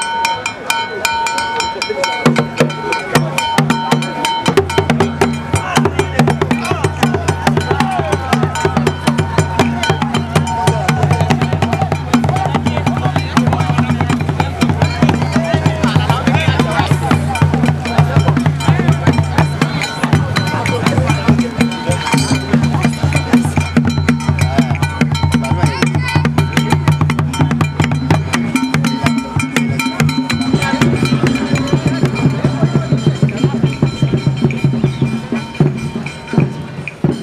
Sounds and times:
Speech: 0.0 - 35.7
Music: 0.0 - 37.2.

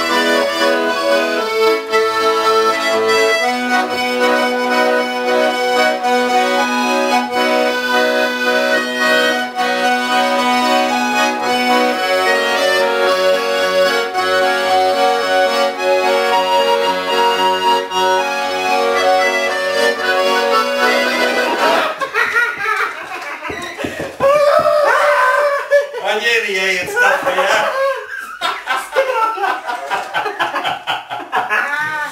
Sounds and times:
Accordion: 0.0 - 24.2
Speech: 26.0 - 28.0.

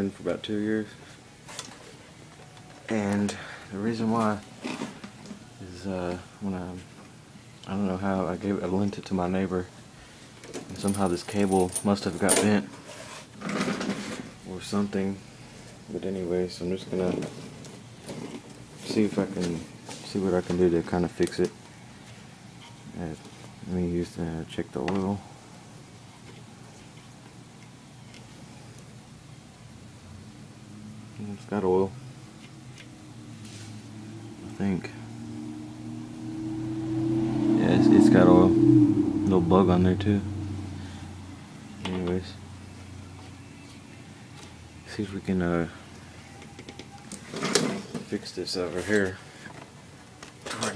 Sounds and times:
Speech: 0.0 - 1.0, 2.9 - 4.4, 5.6 - 6.8, 7.7 - 9.7, 14.5 - 15.2, 15.9 - 17.3, 18.8 - 21.6, 23.0 - 25.2, 31.2 - 31.9, 39.3 - 40.3, 41.9 - 42.4, 44.9 - 45.8, 48.1 - 49.2.

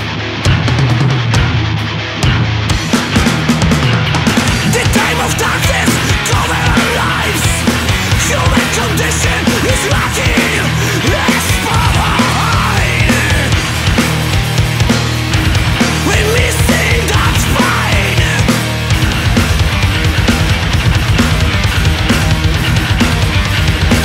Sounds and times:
Music: 0.0 - 24.0.

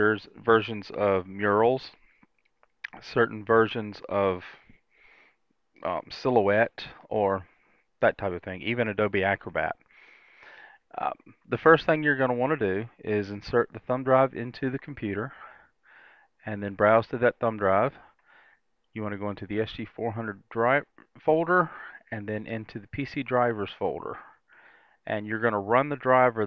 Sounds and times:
Speech: 0.0 - 2.0, 2.8 - 4.6, 5.8 - 9.8, 10.9 - 15.6, 16.4 - 18.1, 19.0 - 24.4, 25.0 - 26.4.

